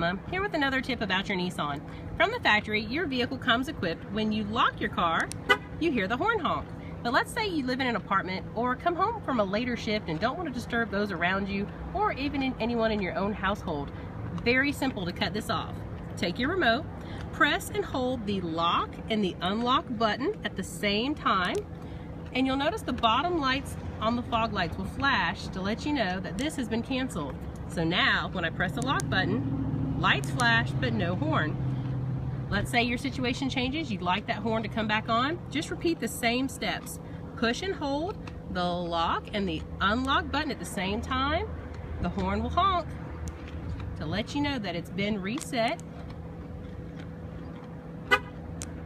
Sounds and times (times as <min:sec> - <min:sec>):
Speech: 0:00.0 - 0:21.6, 0:22.3 - 0:29.4, 0:30.0 - 0:31.6, 0:32.5 - 0:42.9, 0:44.0 - 0:45.8
Outside, urban or manmade: 0:00.0 - 0:48.8
Vehicle: 0:00.0 - 0:48.8.